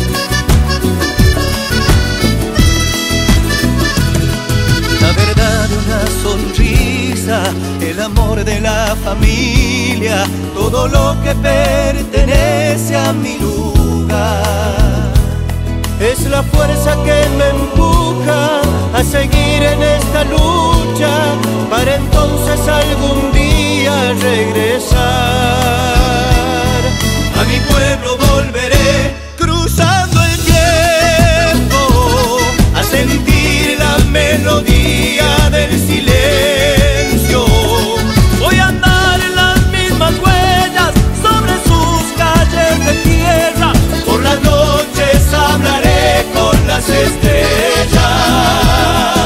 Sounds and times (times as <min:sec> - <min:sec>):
Soul music: 0:00.0 - 0:49.2.